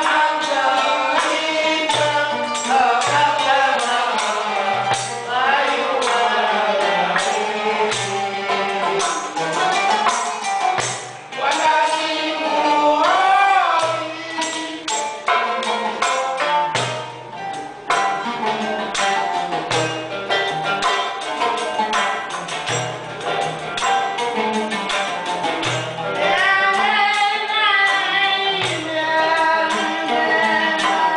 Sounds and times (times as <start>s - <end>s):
Music: 0.0s - 31.1s
Female singing: 11.4s - 14.4s, 26.2s - 31.1s.